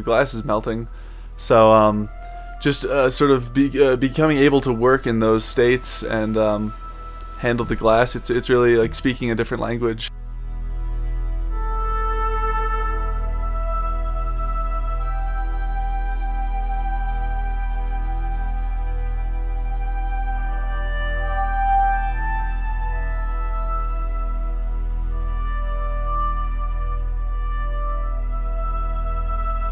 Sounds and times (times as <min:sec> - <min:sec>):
Music: 0:00.0 - 0:29.7.